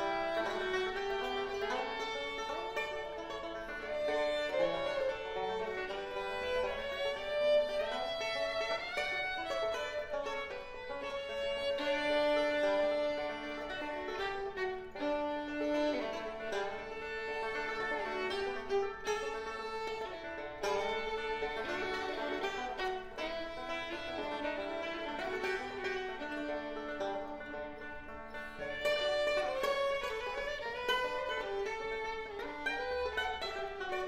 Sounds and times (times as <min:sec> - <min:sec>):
Bowed string instrument: 0:00.0 - 0:34.0.